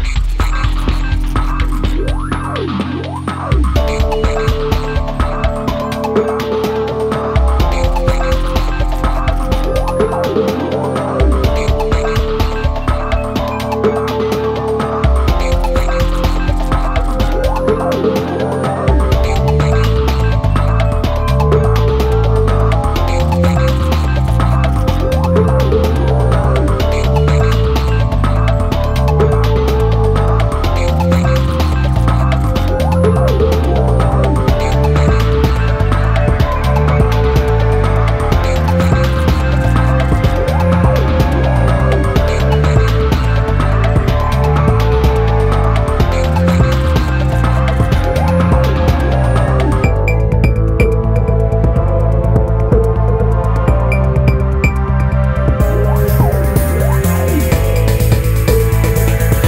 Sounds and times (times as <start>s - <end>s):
Video game music: 0.0s - 59.4s.